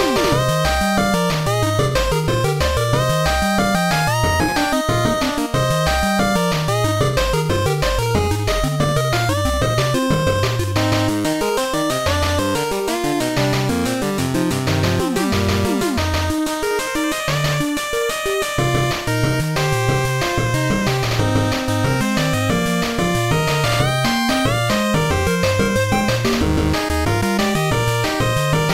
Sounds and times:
Background music: 0.0s - 28.7s
Rock and roll: 0.0s - 28.7s
Video game music: 0.0s - 28.7s.

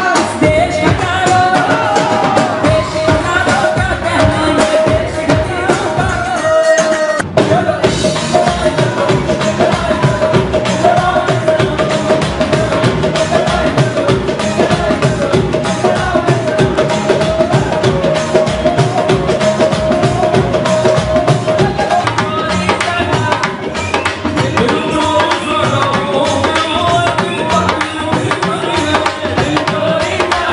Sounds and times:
Male singing: 0.0s - 30.5s
Music: 0.0s - 30.5s.

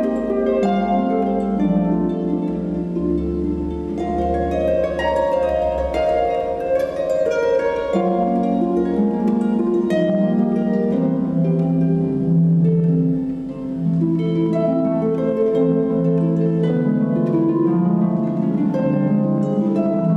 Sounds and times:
Harp: 0.0s - 20.1s
Pizzicato: 0.0s - 20.1s.

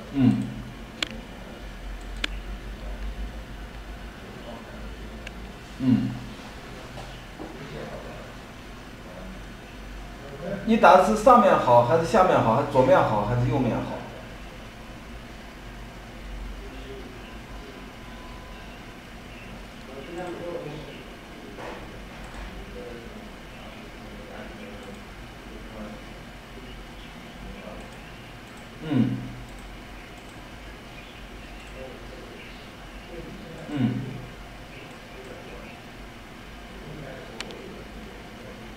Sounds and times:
Speech: 4.2s - 6.2s, 10.2s - 14.3s, 19.9s - 28.1s, 31.7s - 34.3s, 35.0s - 35.8s, 36.7s - 38.7s.

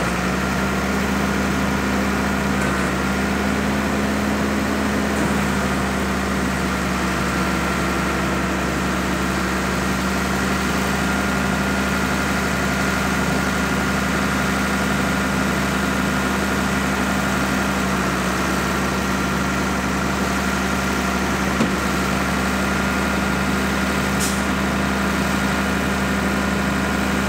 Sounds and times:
Vehicle: 0.0s - 27.2s.

